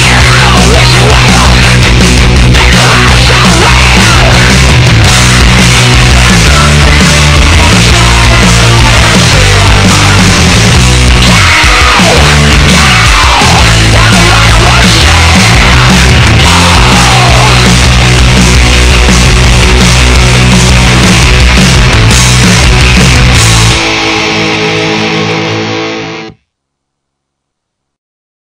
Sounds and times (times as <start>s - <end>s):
Music: 0.0s - 26.5s.